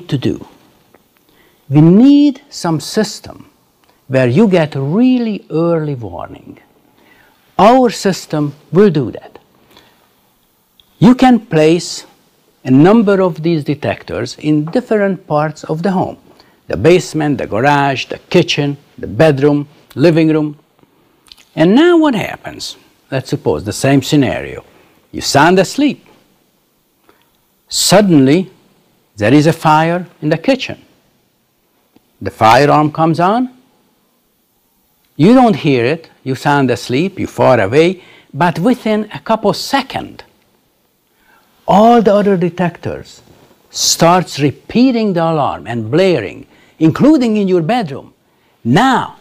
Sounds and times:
Narration, monologue: 0:00.0 - 0:49.2.

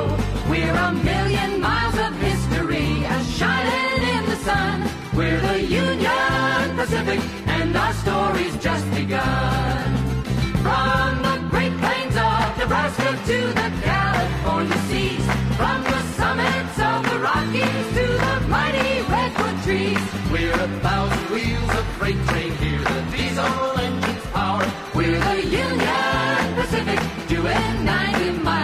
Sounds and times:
Music: 0:00.0 - 0:28.6.

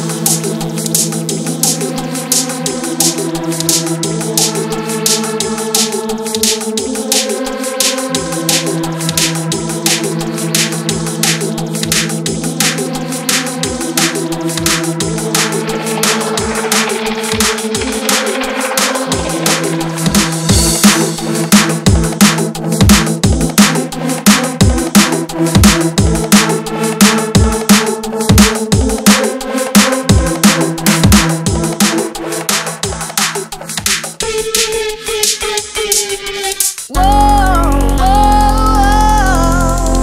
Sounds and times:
Music: 0:00.0 - 0:40.0.

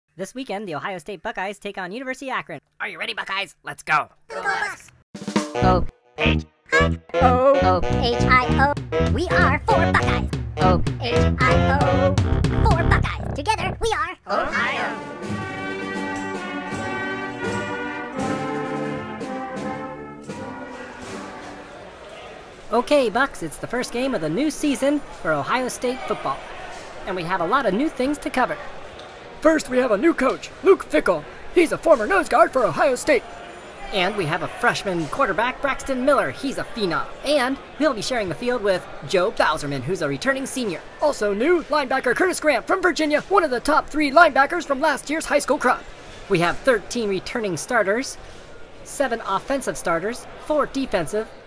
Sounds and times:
Speech: 0:00.2 - 0:04.9, 0:05.6 - 0:11.9, 0:12.6 - 0:15.0, 0:22.1 - 0:26.4, 0:33.8 - 0:48.2, 0:48.9 - 0:51.4
Music: 0:05.2 - 0:13.8, 0:14.5 - 0:21.8.

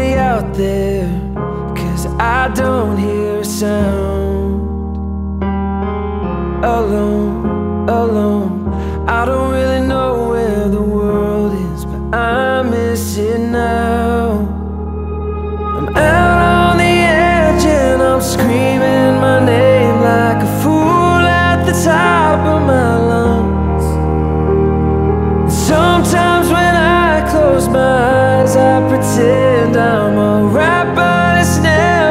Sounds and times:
Music: 0:00.0 - 0:32.1.

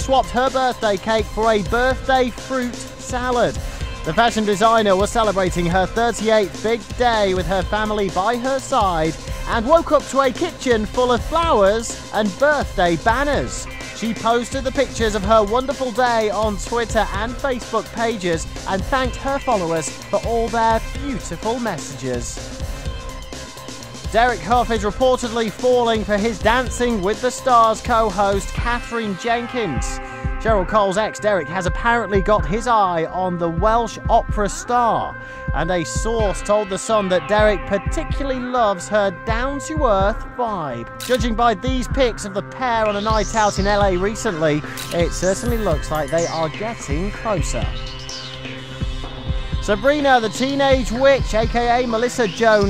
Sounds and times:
Speech: 0:00.0 - 0:22.4, 0:24.1 - 0:47.8, 0:49.6 - 0:52.6
Music: 0:00.0 - 0:52.6.

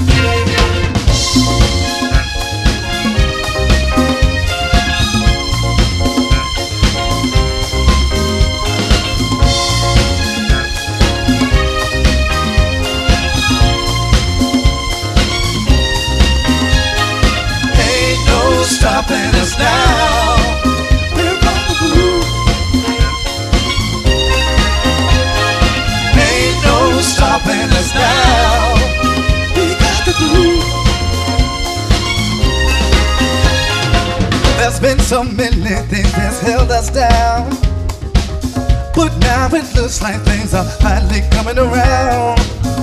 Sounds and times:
Music: 0:00.0 - 0:42.8.

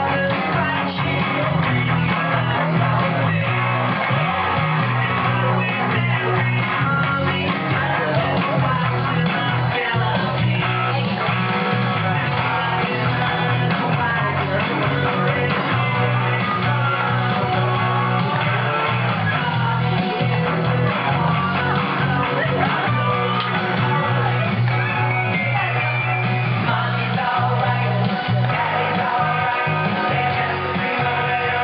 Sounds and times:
Acoustic guitar: 0:00.0 - 0:31.6
Speech: 0:00.0 - 0:31.6.

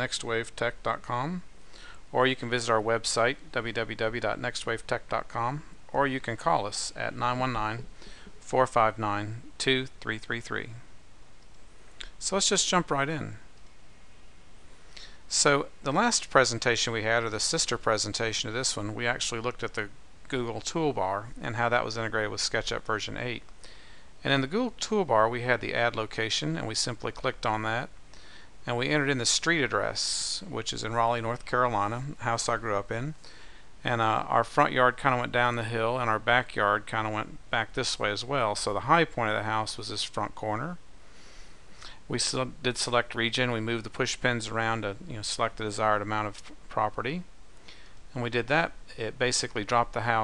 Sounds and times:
Speech: 0:00.0 - 0:01.5, 0:02.1 - 0:10.9, 0:12.0 - 0:13.5, 0:15.3 - 0:23.5, 0:24.2 - 0:28.0, 0:28.6 - 0:33.2, 0:33.8 - 0:40.8, 0:42.0 - 0:47.3, 0:48.1 - 0:50.2.

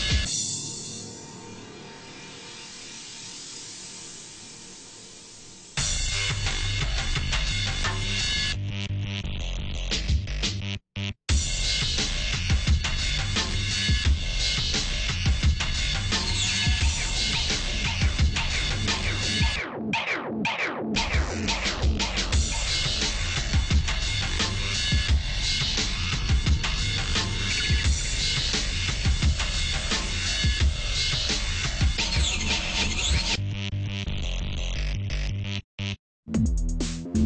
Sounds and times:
Music: 0:00.0 - 0:37.2.

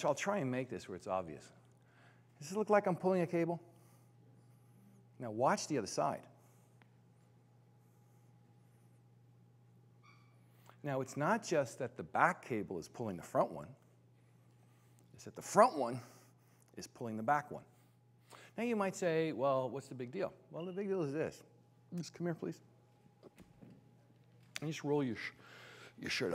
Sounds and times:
Speech: 0:00.0 - 0:01.6, 0:02.4 - 0:03.7, 0:05.2 - 0:06.4, 0:10.8 - 0:13.8, 0:15.1 - 0:16.1, 0:16.7 - 0:17.8, 0:18.6 - 0:22.7, 0:24.6 - 0:25.4, 0:26.0 - 0:26.3.

